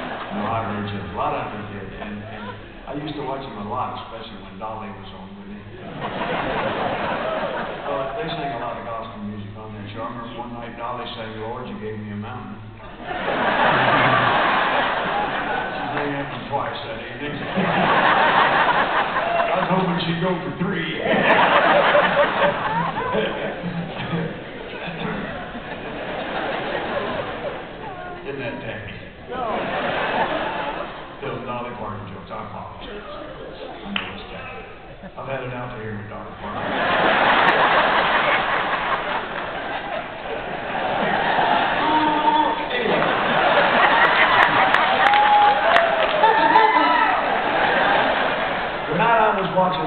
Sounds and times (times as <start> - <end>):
Inside, large room or hall: 0.0 - 49.8.